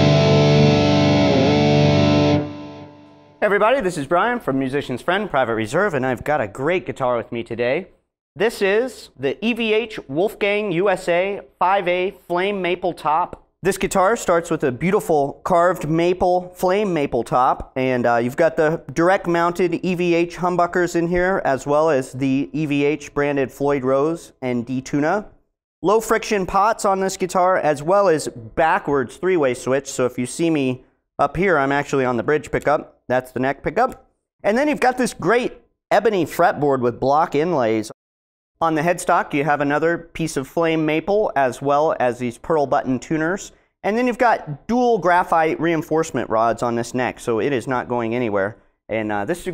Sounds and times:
Speech: 0:03.4 - 0:38.0, 0:38.6 - 0:49.5.

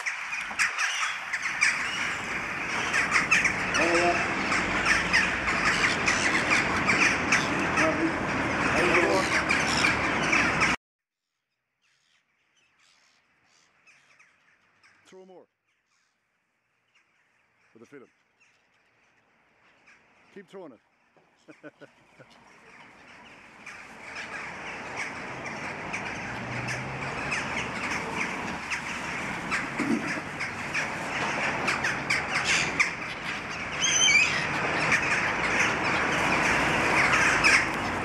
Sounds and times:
Bird vocalization, bird call, bird song: 0:00.0 - 0:38.0
Outside, urban or manmade: 0:00.0 - 0:38.0.

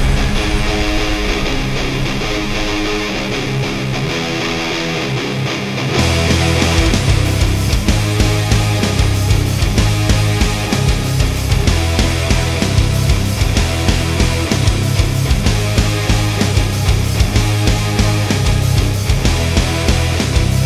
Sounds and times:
Strum: 0:00.0 - 0:19.6
Bass guitar: 0:00.0 - 0:20.6
Electric guitar: 0:00.0 - 0:20.6.

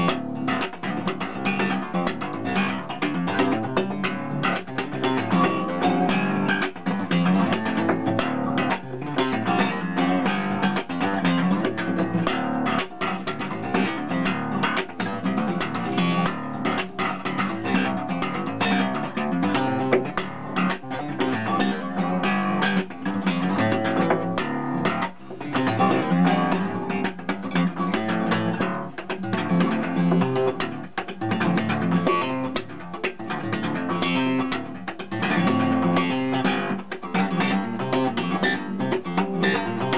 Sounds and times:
Music: 0:00.0 - 0:39.9.

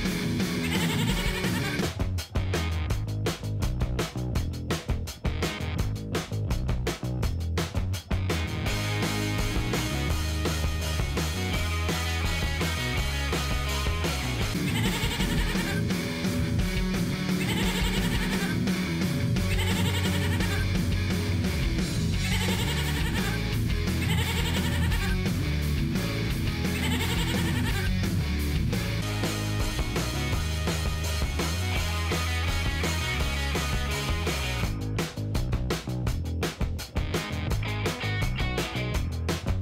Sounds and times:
Music: 0:00.0 - 0:39.6
Bleat: 0:24.0 - 0:24.9.

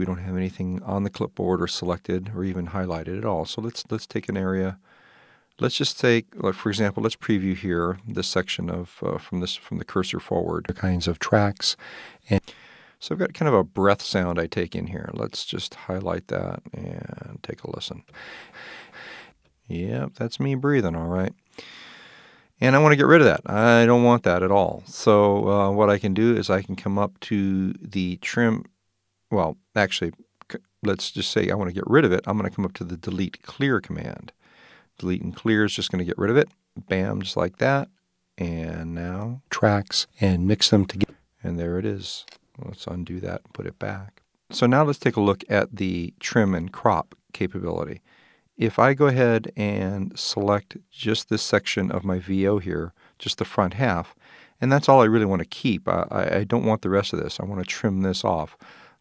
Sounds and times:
Speech: 0:00.0 - 0:04.8, 0:05.6 - 0:21.8, 0:22.6 - 0:28.7, 0:29.3 - 0:34.4, 0:35.0 - 0:48.0, 0:48.6 - 0:58.7.

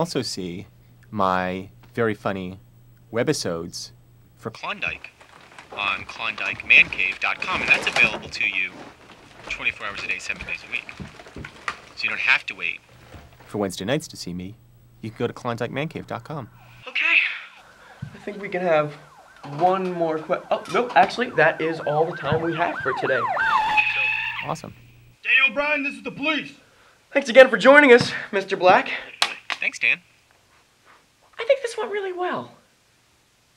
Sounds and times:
Speech: 0:00.0 - 0:05.1, 0:05.8 - 0:08.8, 0:09.5 - 0:10.9, 0:12.0 - 0:12.8, 0:13.5 - 0:17.5, 0:18.2 - 0:23.3, 0:25.3 - 0:29.0.

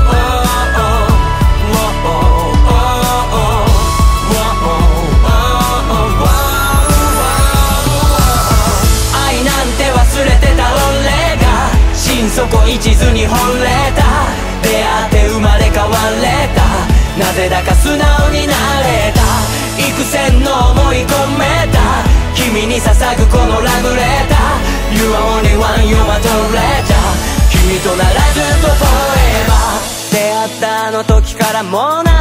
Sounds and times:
Music: 0:00.0 - 0:32.2.

